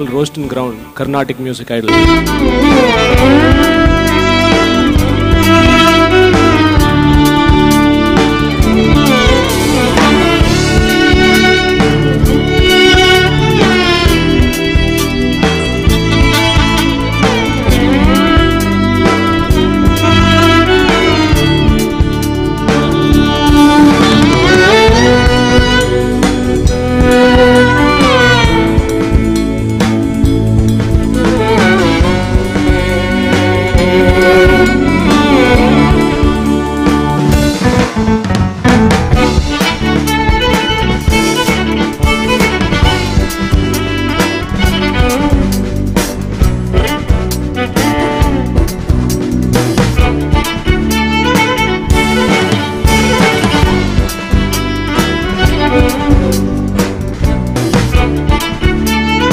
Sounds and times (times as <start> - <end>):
Carnatic music: 0.0 - 38.0.